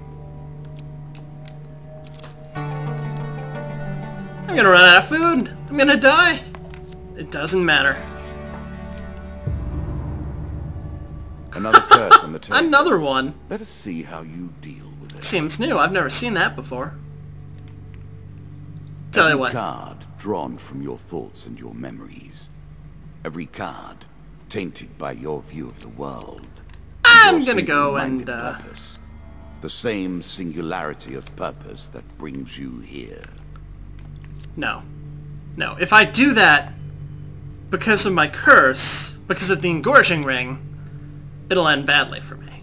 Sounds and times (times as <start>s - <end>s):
Speech: 4.5s - 6.5s, 11.6s - 17.0s, 19.1s - 22.5s, 23.2s - 29.0s, 29.6s - 33.4s, 35.6s - 36.7s, 37.7s - 40.6s, 41.5s - 42.6s.